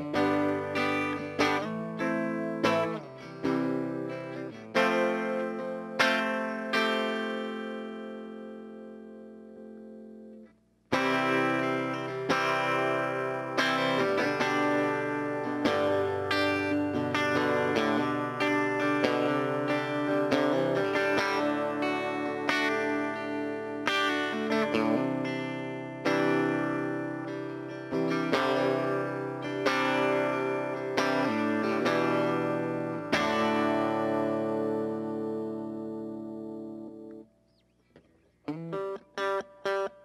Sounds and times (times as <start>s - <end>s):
Electric guitar: 0.0s - 40.0s.